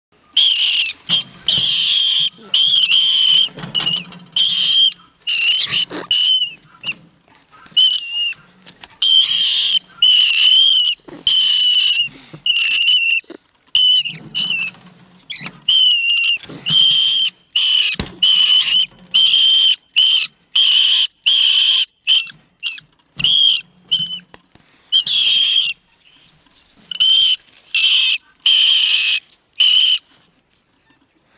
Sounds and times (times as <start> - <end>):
Animal: 0.2 - 24.3, 24.9 - 31.3.